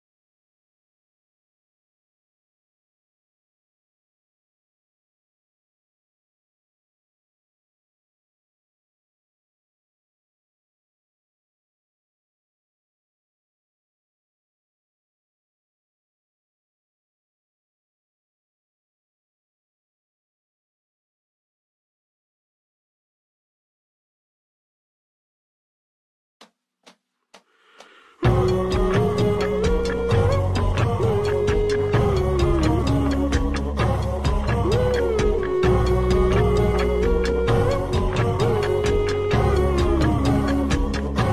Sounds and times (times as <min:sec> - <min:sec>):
Music: 0:28.1 - 0:41.3.